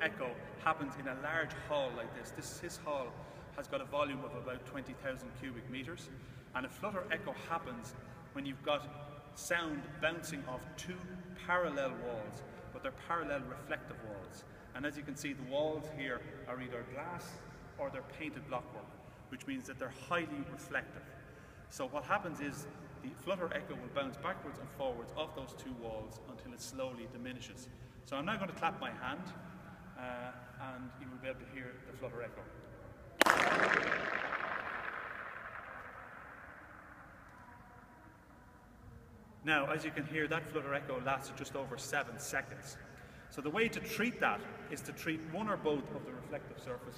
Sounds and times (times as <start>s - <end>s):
Speech: 0.0s - 21.1s, 21.7s - 29.4s, 30.0s - 32.5s, 39.4s - 46.9s
Echo: 0.0s - 46.9s.